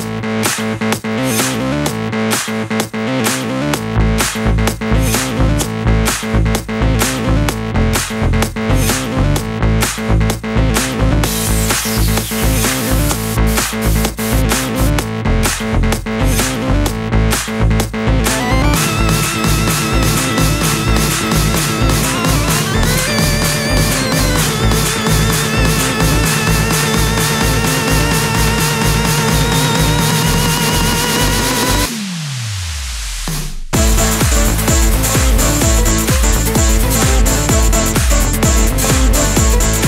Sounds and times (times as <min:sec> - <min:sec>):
Sampler: 0:10.8 - 0:15.0, 0:18.1 - 0:39.8.